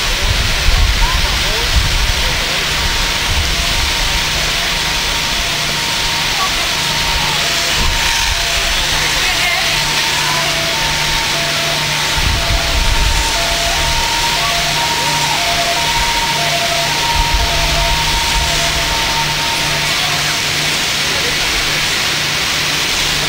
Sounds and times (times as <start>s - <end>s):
Speech: 0.0s - 23.2s.